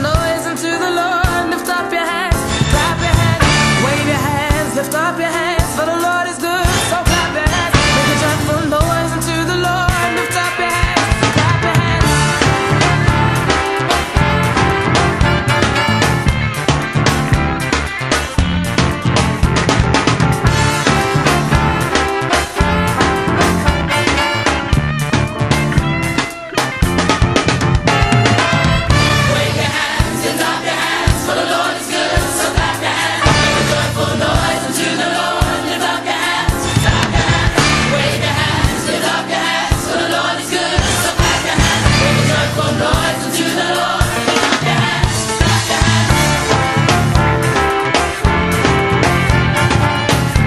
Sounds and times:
Independent music: 0.0s - 50.4s.

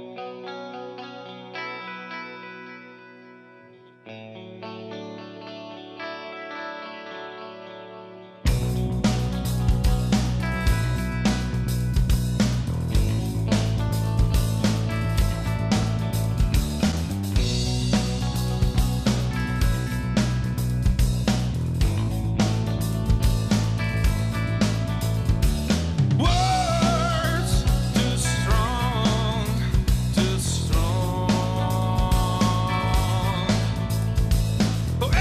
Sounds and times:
Music: 0.0s - 35.2s.

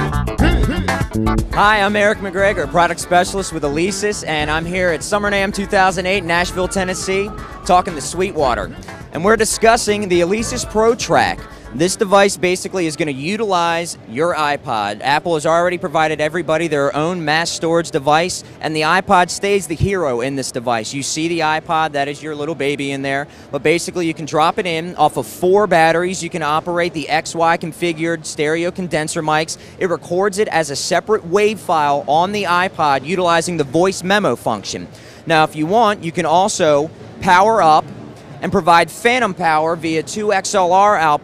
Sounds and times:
Speech: 1.6s - 41.2s.

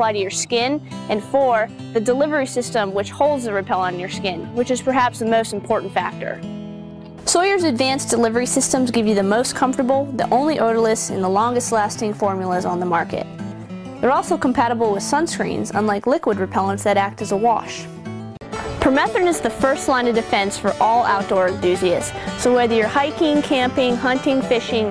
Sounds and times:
Speech: 0.0s - 6.4s, 7.3s - 13.3s, 14.0s - 17.9s, 18.8s - 24.9s
Music: 0.0s - 24.9s.

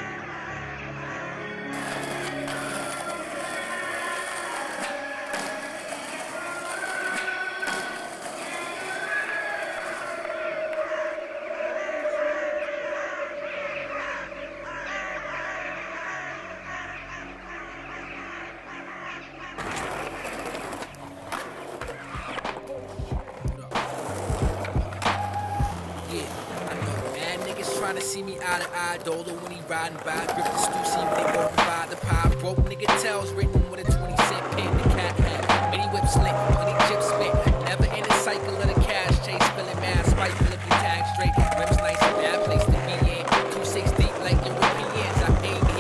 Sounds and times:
Skateboard: 1.8s - 11.2s, 19.6s - 45.8s.

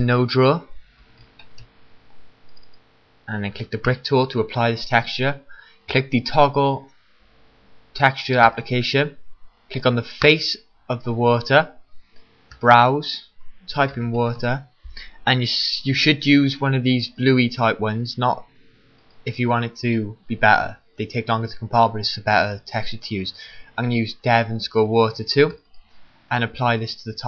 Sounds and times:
Speech: 0.0s - 0.8s, 3.3s - 6.9s, 8.0s - 11.8s, 12.6s - 18.5s, 19.3s - 25.6s, 26.3s - 27.2s.

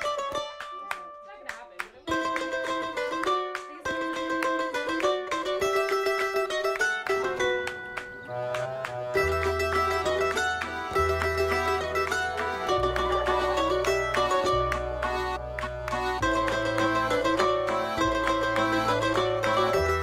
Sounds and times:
Mandolin: 0.0s - 20.0s.

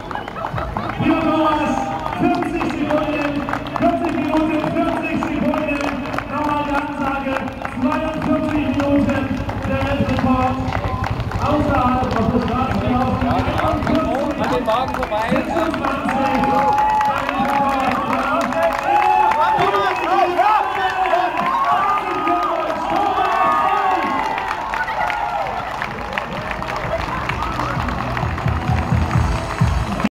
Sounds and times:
Outside, urban or manmade: 0.0s - 30.1s
Speech: 1.0s - 24.1s
Music: 26.4s - 30.1s.

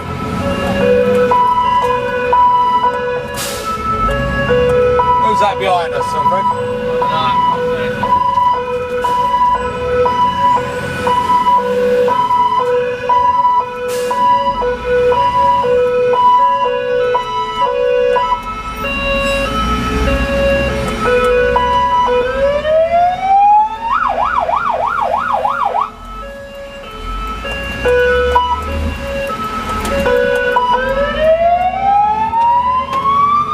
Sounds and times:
Car: 0.0s - 33.5s
Fire engine, fire truck (siren): 0.0s - 33.5s
Outside, urban or manmade: 0.0s - 33.5s
Police car (siren): 0.0s - 33.5s.

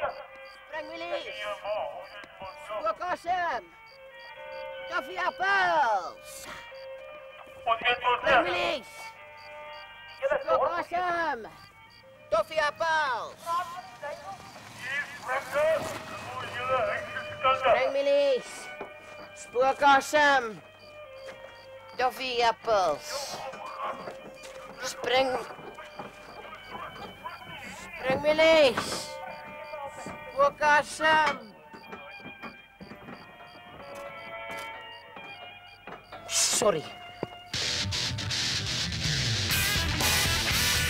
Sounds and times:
Music: 0.0s - 40.9s
Speech: 26.7s - 29.2s, 36.3s - 36.9s.

